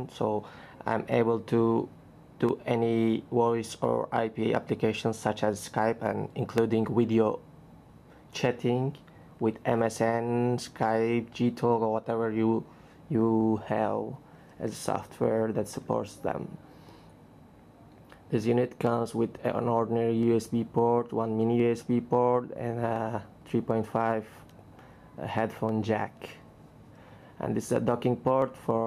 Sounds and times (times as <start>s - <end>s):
Speech: 0.0s - 7.4s, 8.4s - 16.6s, 18.3s - 24.5s, 25.2s - 26.4s, 27.4s - 28.8s.